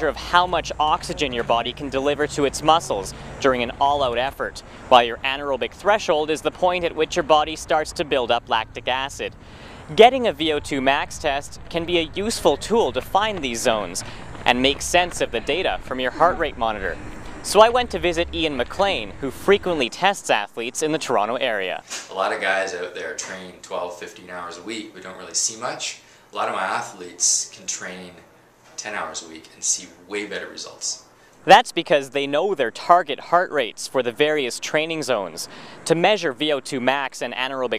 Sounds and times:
Male speech, man speaking: 0.0 - 9.3, 9.9 - 28.2, 28.8 - 37.7
Run: 11.4 - 17.2.

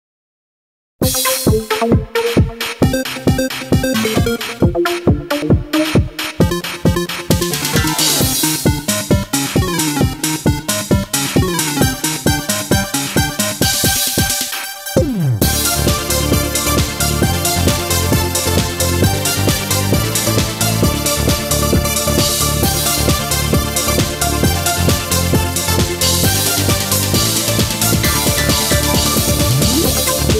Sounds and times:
Techno: 1.0 - 30.3.

